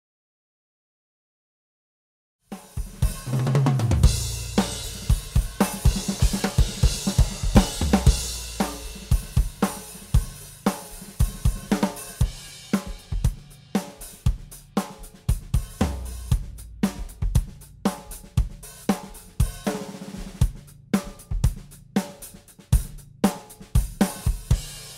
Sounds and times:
Snare drum: 2.6s - 24.9s
Hi-hat: 4.0s - 24.9s.

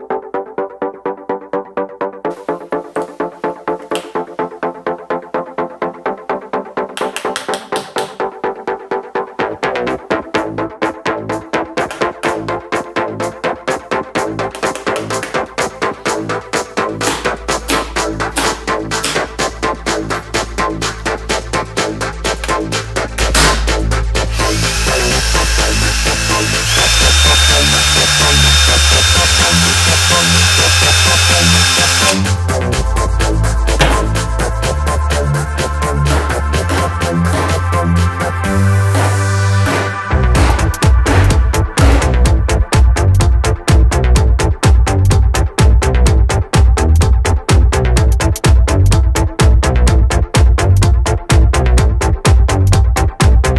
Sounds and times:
Electronica: 16.2s - 46.2s.

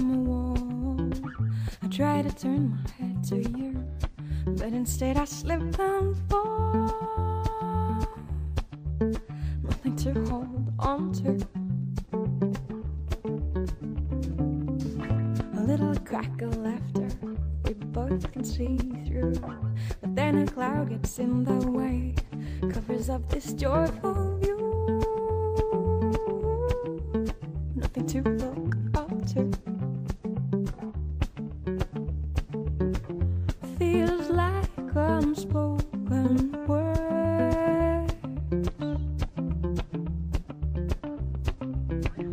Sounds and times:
Music: 0.0s - 42.3s.

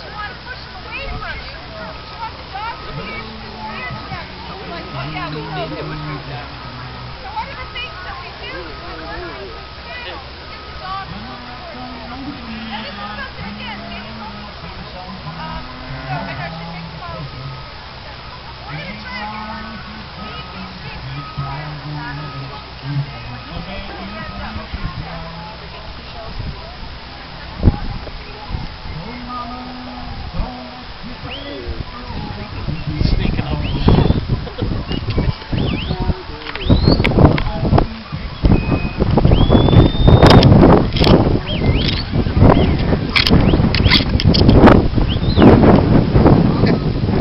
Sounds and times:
Speech: 0.0s - 38.4s.

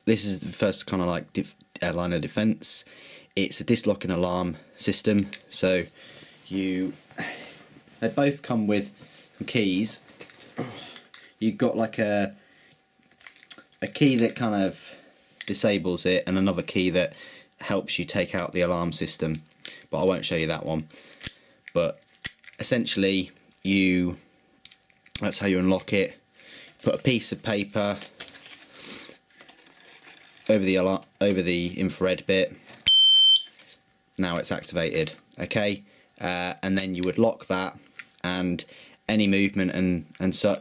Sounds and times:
Speech: 0.0s - 5.9s, 6.5s - 7.0s, 8.0s - 10.0s, 11.4s - 12.4s, 13.8s - 20.9s, 21.8s - 22.0s, 22.6s - 24.2s, 25.2s - 26.2s, 26.8s - 28.0s, 30.5s - 32.6s, 34.2s - 40.6s
Inside, small room: 0.0s - 40.6s.

